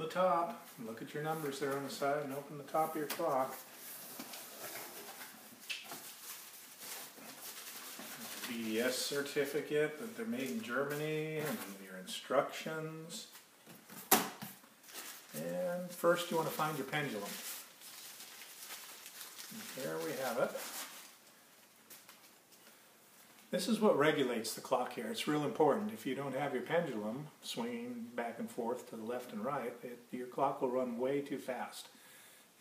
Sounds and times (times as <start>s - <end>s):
Speech: 0.0s - 3.6s, 8.4s - 13.4s, 15.3s - 17.4s, 19.6s - 20.6s, 23.5s - 32.0s.